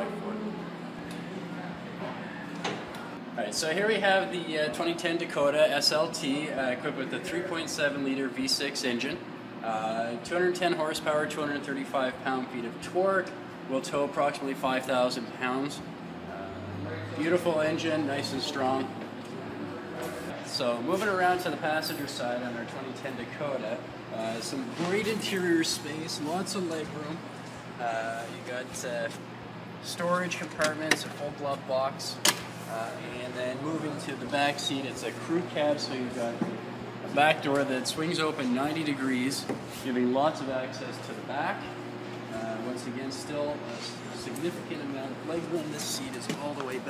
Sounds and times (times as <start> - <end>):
Speech: 3.4 - 19.0, 19.8 - 27.2, 27.8 - 29.2, 29.8 - 46.8.